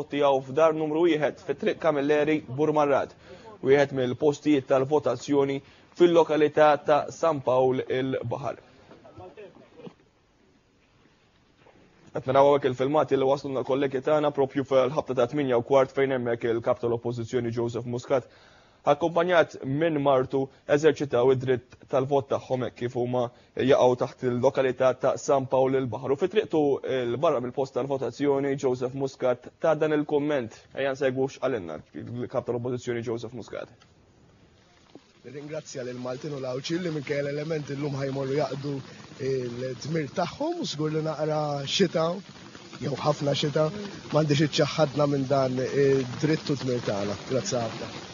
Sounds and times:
Speech: 0.0s - 9.9s, 12.1s - 18.3s, 18.9s - 33.8s, 35.3s - 42.2s, 42.8s - 48.0s.

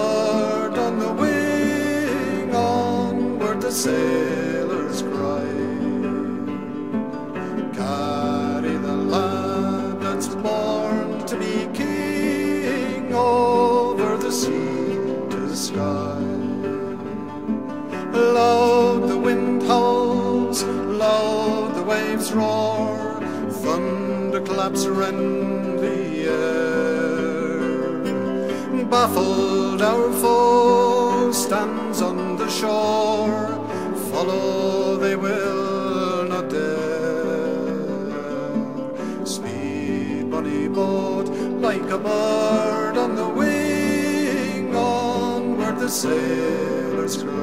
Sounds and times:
Music: 0.0s - 47.4s.

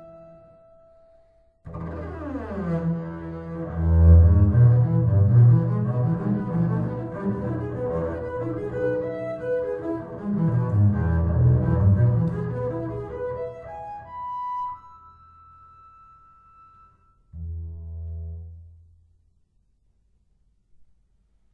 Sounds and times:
Cello: 0.0s - 18.9s.

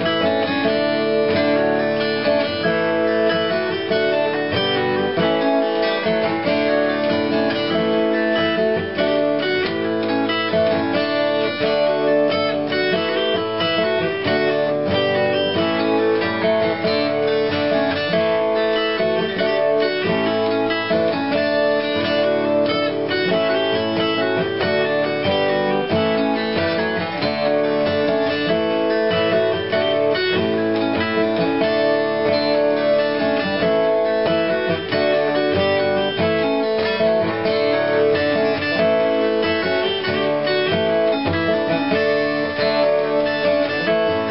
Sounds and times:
Acoustic guitar: 0.0s - 44.3s
Strum: 0.0s - 44.3s.

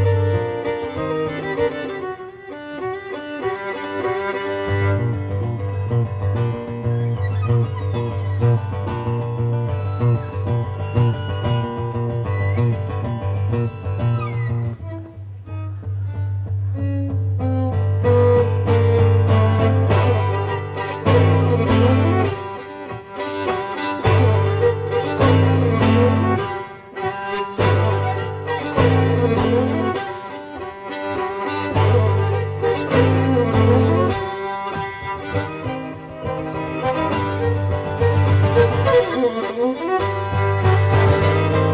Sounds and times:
Country: 0.0s - 41.7s
Violin, fiddle: 0.0s - 41.7s.

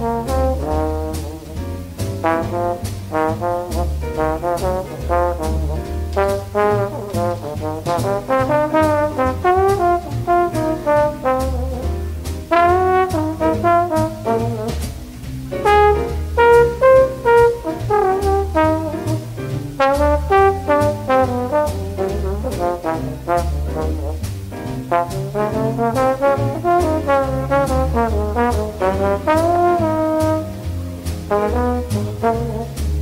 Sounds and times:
Trombone: 0.0s - 33.0s.

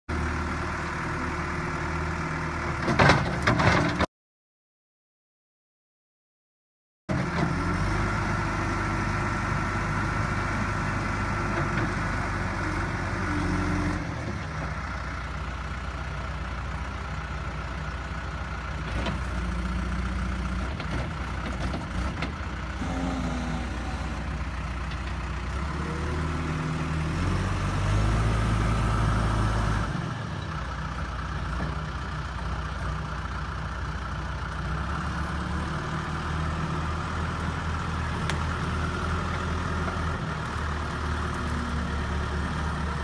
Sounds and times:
Vehicle: 0.0s - 4.1s, 7.1s - 43.0s
Heavy engine (low frequency): 0.1s - 4.1s, 7.1s - 43.0s.

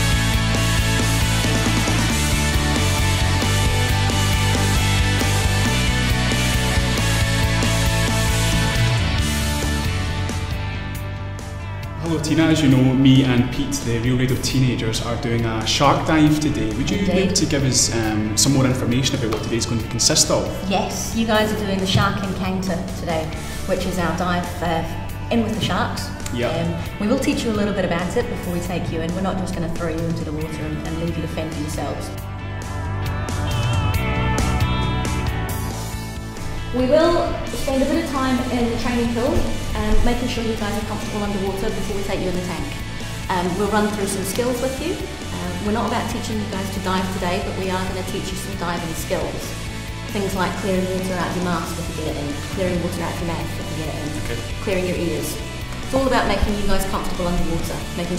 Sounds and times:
Music: 0.0s - 58.1s
Speech: 12.0s - 32.1s.

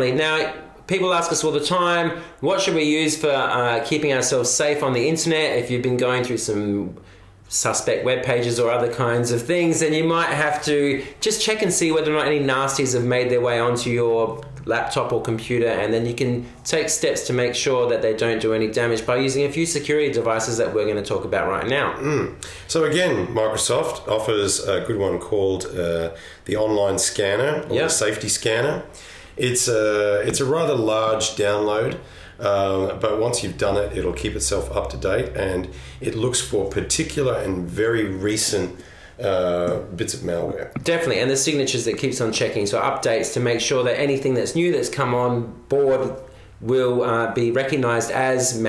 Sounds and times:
Speech: 0.0s - 48.6s.

